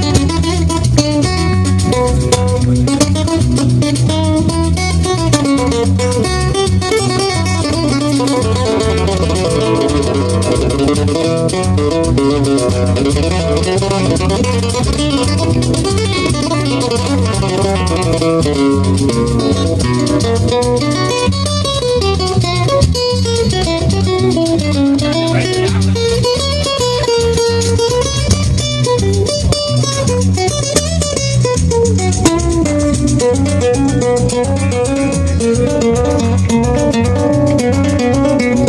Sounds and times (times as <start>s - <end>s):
Strum: 0.0s - 38.6s.